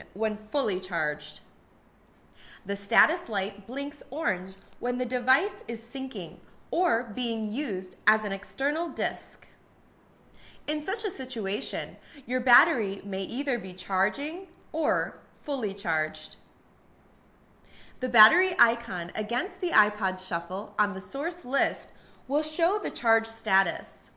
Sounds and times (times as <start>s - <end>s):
Speech: 0.0s - 1.5s, 2.6s - 9.6s, 10.7s - 16.4s, 18.0s - 24.1s.